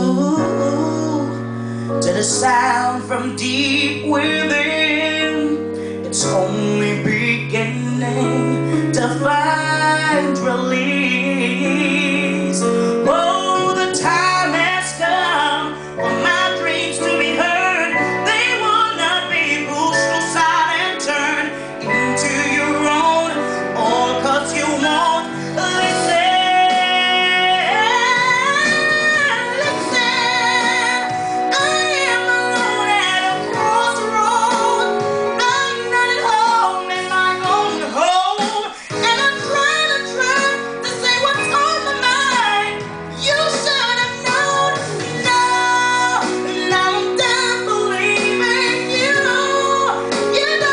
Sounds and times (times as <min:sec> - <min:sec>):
Female singing: 0:00.0 - 0:01.4, 0:02.0 - 0:50.7
Music: 0:00.0 - 0:50.7.